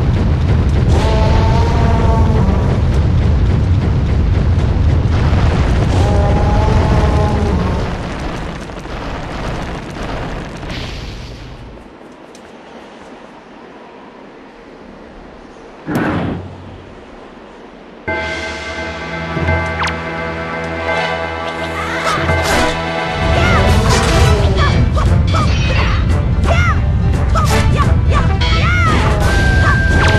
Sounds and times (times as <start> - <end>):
Music: 18.1 - 30.1.